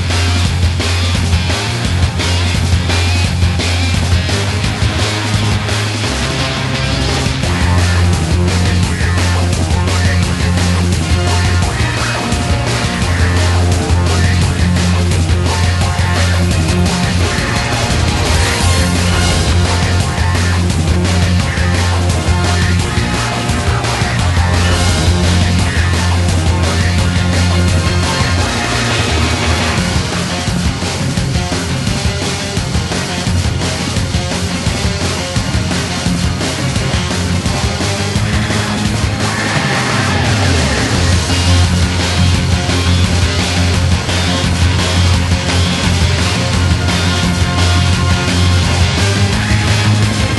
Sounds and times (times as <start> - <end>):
Exciting music: 0.0 - 50.3.